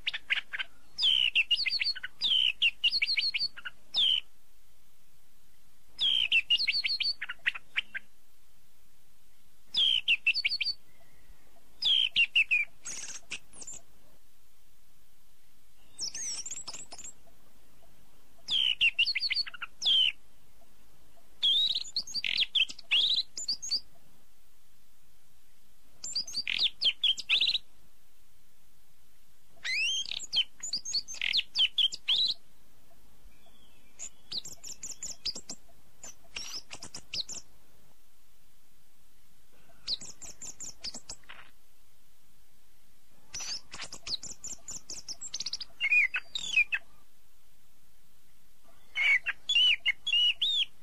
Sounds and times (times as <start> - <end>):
Chirp, tweet: 0.0 - 4.3, 6.0 - 8.1, 9.7 - 13.9, 15.8 - 24.0, 26.0 - 27.6, 29.6 - 32.4, 33.3 - 37.5, 39.7 - 41.5, 43.3 - 47.1, 48.7 - 50.8.